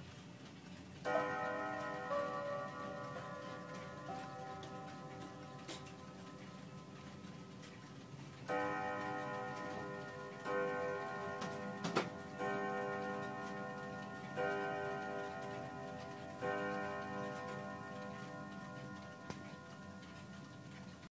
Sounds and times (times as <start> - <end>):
Tick-tock: 1.0 - 21.1.